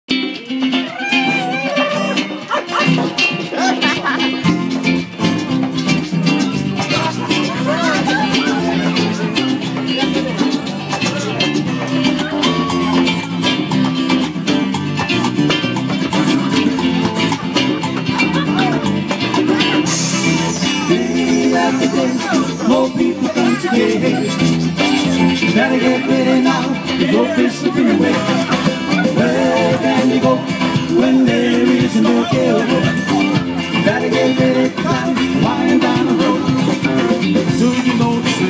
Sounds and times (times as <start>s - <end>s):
Music: 0.1s - 38.4s
Speech: 6.2s - 13.6s, 16.2s - 30.4s.